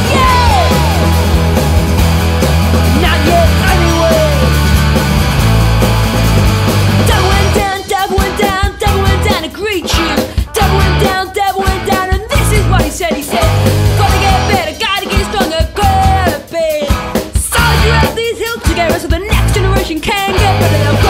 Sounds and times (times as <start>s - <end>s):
Music: 0.0s - 21.1s.